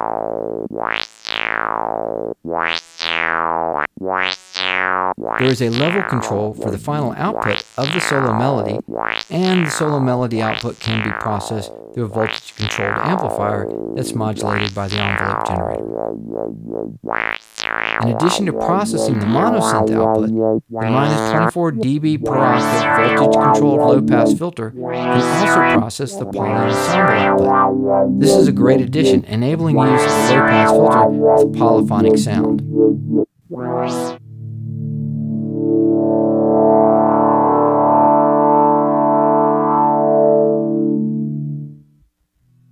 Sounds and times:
Sidetone: 0:00.0 - 0:41.9
Speech: 0:05.4 - 0:15.9, 0:18.0 - 0:27.6, 0:28.2 - 0:32.6
Synthesizer: 0:10.5 - 0:34.2, 0:35.2 - 0:41.7.

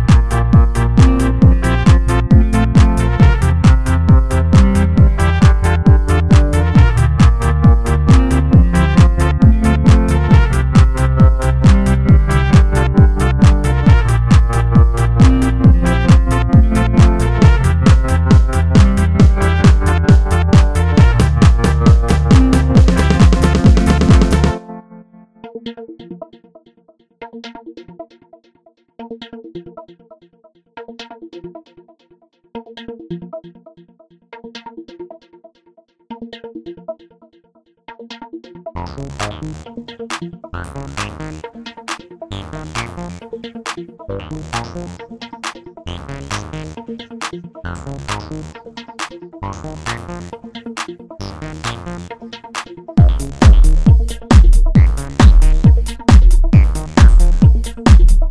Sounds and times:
Techno: 0:00.0 - 0:24.8, 0:38.8 - 0:58.3.

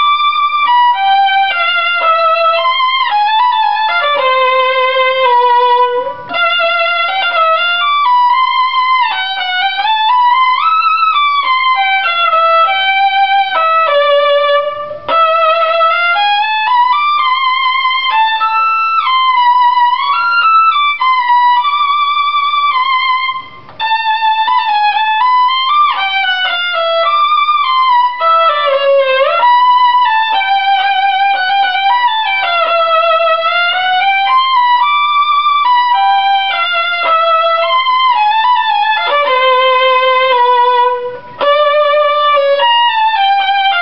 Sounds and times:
Violin, fiddle: 0:00.0 - 0:43.8.

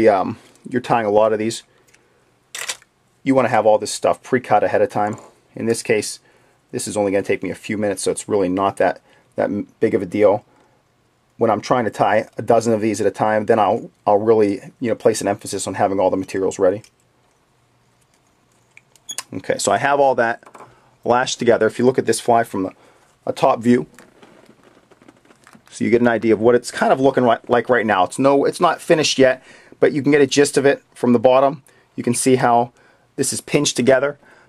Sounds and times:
Speech: 0:00.0 - 0:01.7, 0:03.2 - 0:10.5, 0:11.4 - 0:16.9, 0:19.2 - 0:20.4, 0:21.1 - 0:23.9, 0:25.7 - 0:34.2.

